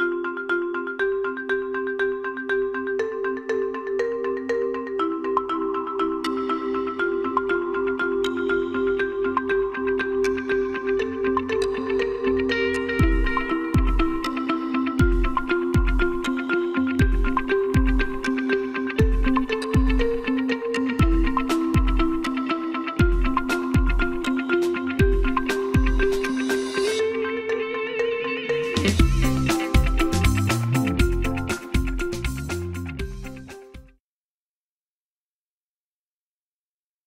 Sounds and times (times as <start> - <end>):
Music: 0.0 - 34.0.